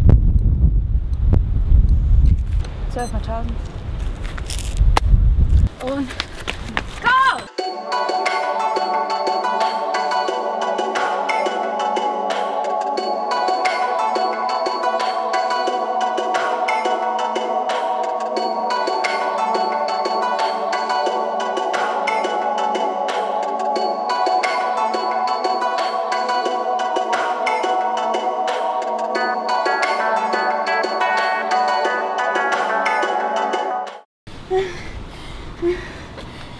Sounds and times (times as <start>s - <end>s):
Music: 7.5s - 34.0s.